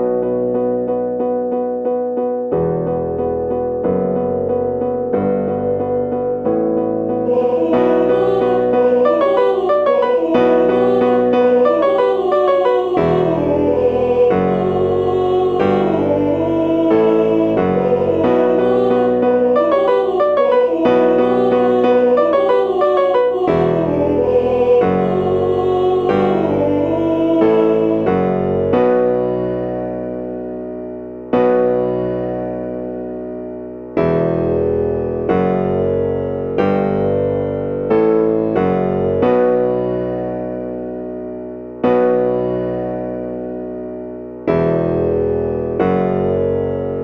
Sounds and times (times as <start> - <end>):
Tender music: 0.0 - 34.0.